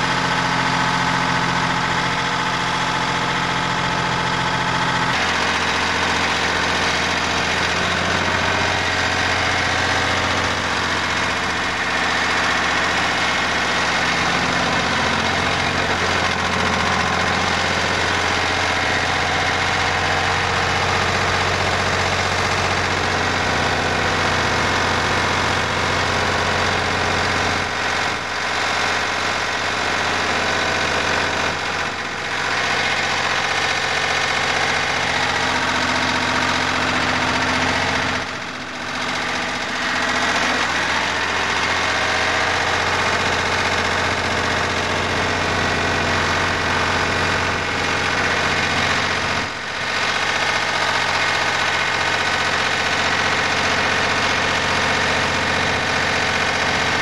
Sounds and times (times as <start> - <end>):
Drill: 0.0 - 57.0.